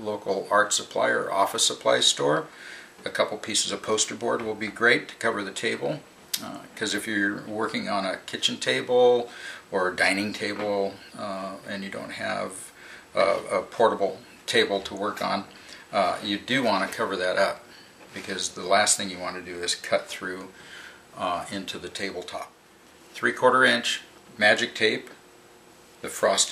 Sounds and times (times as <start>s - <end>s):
Speech: 0.0s - 20.6s, 21.2s - 22.6s, 23.2s - 25.2s, 26.0s - 26.5s.